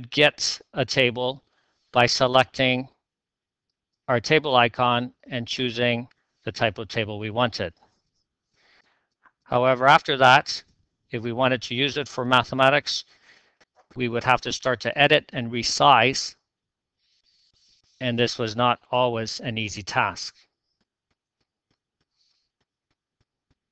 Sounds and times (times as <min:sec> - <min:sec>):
Speech: 0:00.0 - 0:01.4, 0:02.0 - 0:02.9, 0:04.1 - 0:07.7, 0:09.5 - 0:10.6, 0:11.2 - 0:13.1, 0:14.0 - 0:16.4, 0:18.0 - 0:20.4.